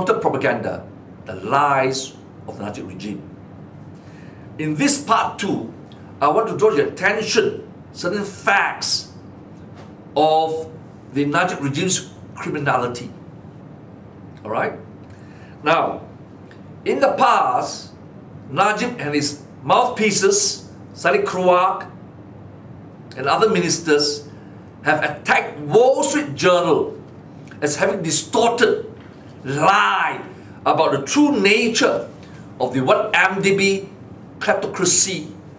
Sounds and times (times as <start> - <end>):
Speech: 0.0 - 3.3, 4.6 - 9.2, 10.2 - 13.2, 14.4 - 14.8, 15.6 - 16.1, 16.9 - 22.0, 23.2 - 27.0, 27.6 - 35.4.